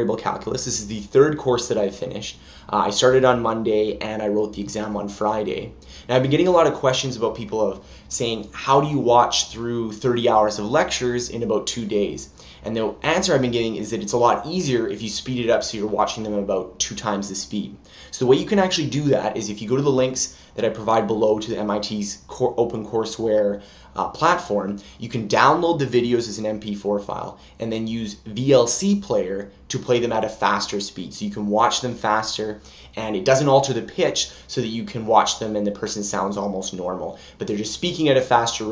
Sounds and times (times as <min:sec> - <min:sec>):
Speech: 0:00.0 - 0:38.7.